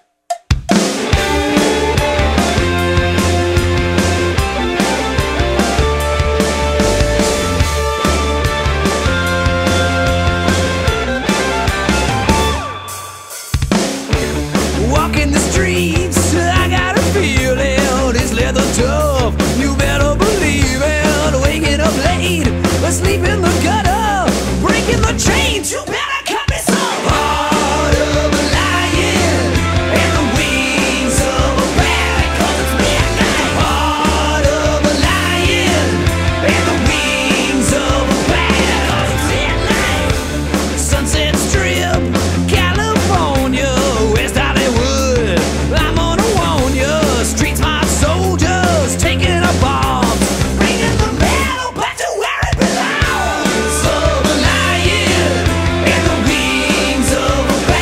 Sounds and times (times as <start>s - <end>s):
Music: 0.0s - 57.8s.